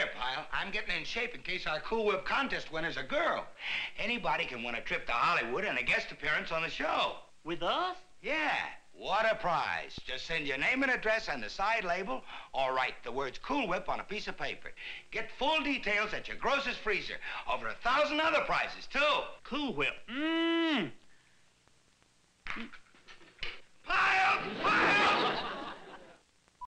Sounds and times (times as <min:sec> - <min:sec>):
Speech: 0:00.0 - 0:21.0, 0:23.9 - 0:25.4.